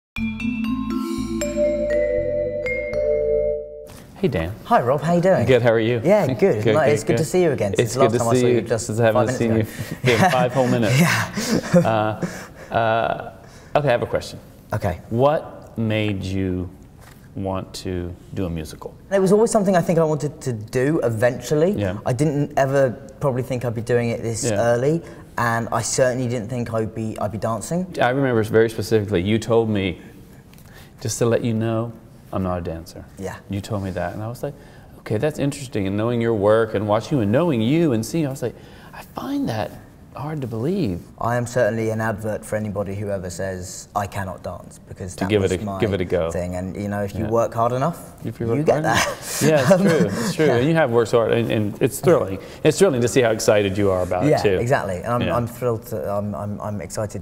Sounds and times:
Marimba, xylophone: 0.2s - 3.9s
Speech: 4.2s - 11.2s, 39.1s - 57.2s.

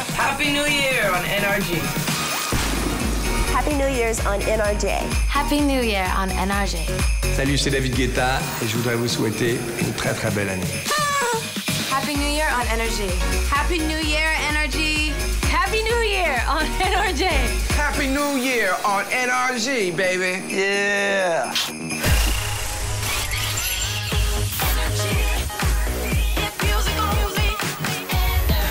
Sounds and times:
Music: 0.0s - 28.7s.

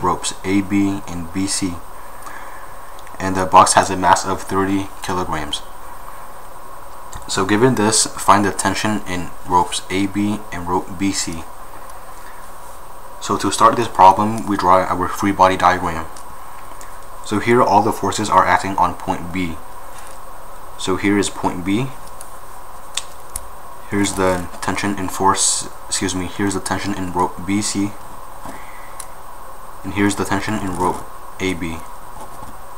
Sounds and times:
Speech: 0.0s - 1.8s, 3.2s - 5.7s, 7.2s - 11.5s, 13.2s - 16.2s, 17.2s - 19.6s, 20.8s - 22.0s, 23.9s - 28.0s, 29.8s - 31.9s.

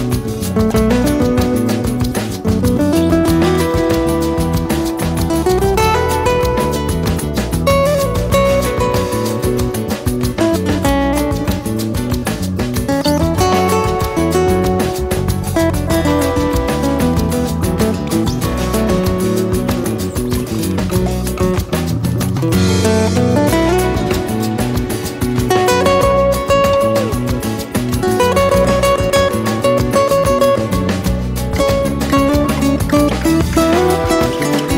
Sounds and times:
Music: 0.0s - 34.7s.

